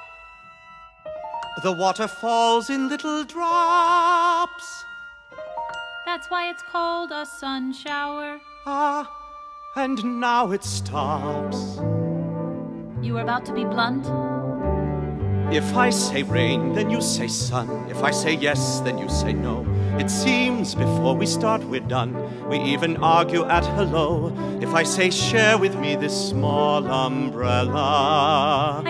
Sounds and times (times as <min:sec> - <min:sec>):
Music: 0:00.0 - 0:28.8
Speech: 0:13.0 - 0:14.1.